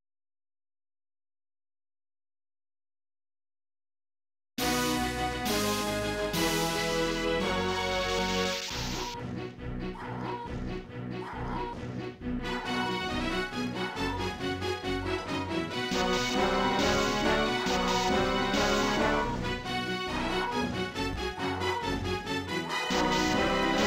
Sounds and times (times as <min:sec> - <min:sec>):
Music: 0:04.6 - 0:23.8.